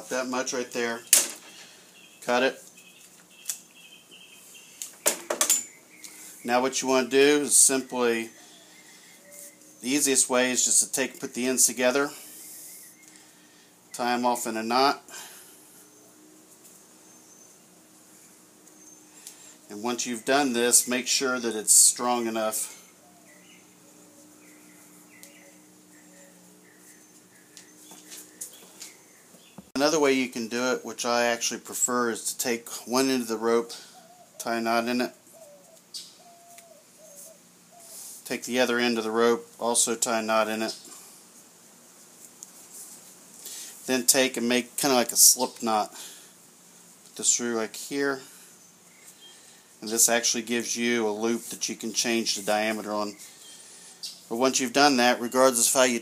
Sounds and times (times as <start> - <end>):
Speech: 0.0 - 1.1, 2.2 - 2.6, 6.4 - 8.3, 9.8 - 12.2, 14.0 - 15.1, 19.7 - 22.8, 29.8 - 33.8, 34.4 - 35.2, 38.2 - 40.8, 43.9 - 46.0, 47.2 - 48.3, 49.8 - 53.2, 54.3 - 56.0.